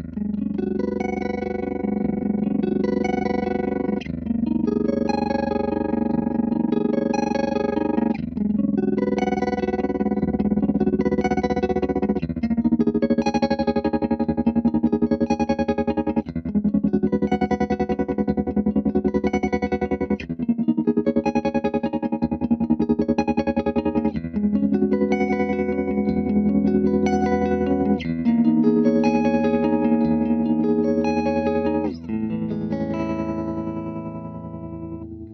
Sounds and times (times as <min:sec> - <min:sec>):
Music: 0:00.0 - 0:35.3.